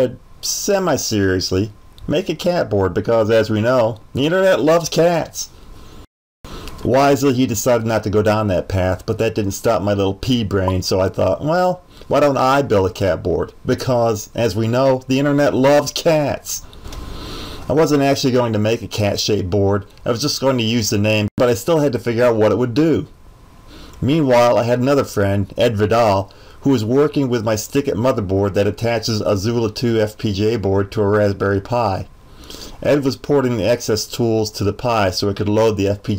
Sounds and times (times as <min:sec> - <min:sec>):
Speech: 0:00.0 - 0:05.5, 0:06.8 - 0:16.6, 0:17.7 - 0:23.1, 0:24.0 - 0:32.1, 0:32.8 - 0:36.1.